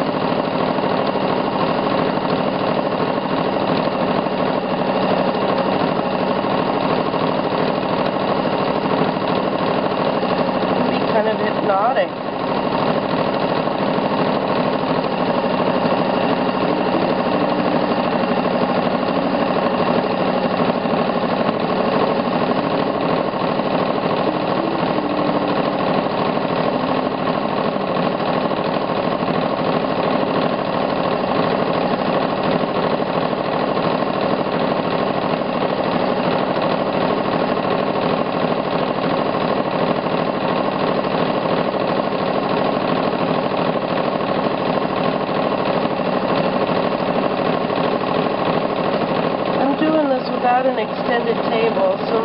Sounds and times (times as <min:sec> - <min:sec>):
Jackhammer: 0:00.0 - 0:52.2
Sewing machine: 0:00.0 - 0:52.2.